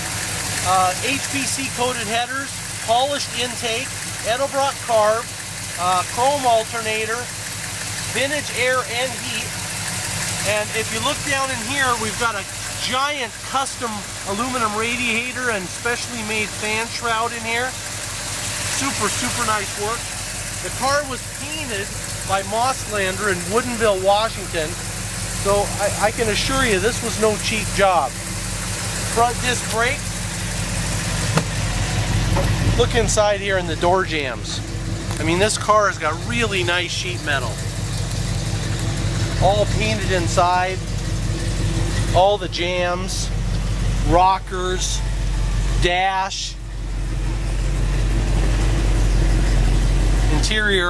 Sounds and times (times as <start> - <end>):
Medium engine (mid frequency): 0.0 - 50.8
Vehicle: 0.0 - 50.8
Speech: 0.6 - 7.3, 8.1 - 9.5, 10.4 - 17.8, 18.8 - 24.8, 25.4 - 28.2, 29.1 - 30.0, 32.7 - 34.6, 35.2 - 37.6, 39.4 - 40.8, 42.1 - 43.3, 44.0 - 45.0, 45.8 - 46.6, 50.2 - 50.8.